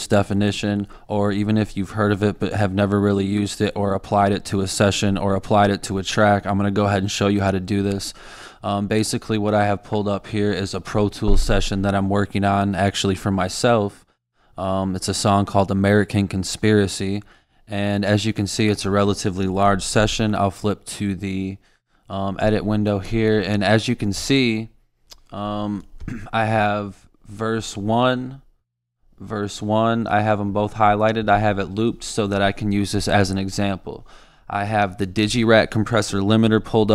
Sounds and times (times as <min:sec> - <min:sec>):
Speech: 0:00.0 - 0:28.5, 0:29.2 - 0:36.9.